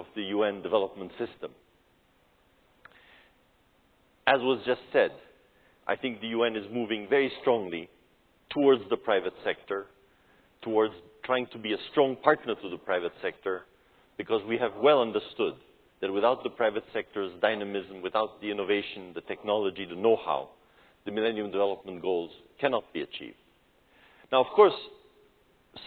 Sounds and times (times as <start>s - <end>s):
Male speech, man speaking: 0.0s - 1.6s, 4.3s - 7.9s, 8.5s - 9.9s, 10.6s - 23.4s, 24.3s - 25.0s
Narration, monologue: 0.0s - 25.8s.